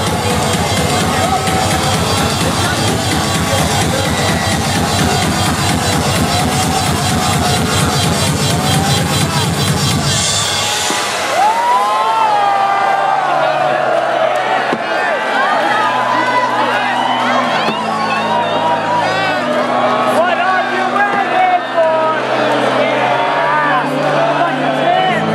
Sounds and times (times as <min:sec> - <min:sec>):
Pop music: 0:00.0 - 0:13.1
Exciting music: 0:00.0 - 0:25.3.